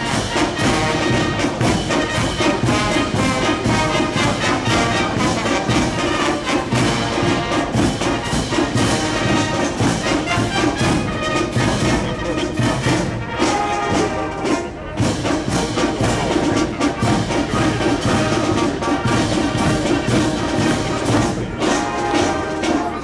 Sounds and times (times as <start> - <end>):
Music: 0.0 - 23.0.